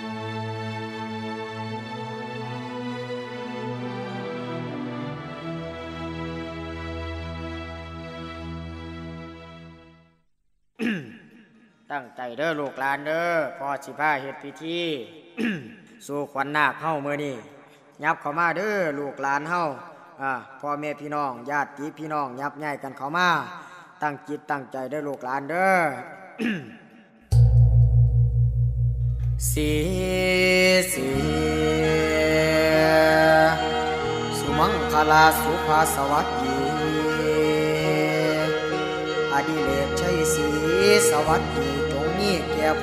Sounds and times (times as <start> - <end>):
Music: 0.0 - 10.2, 27.4 - 42.8
Speech: 11.9 - 26.7, 34.4 - 37.3, 39.4 - 42.8.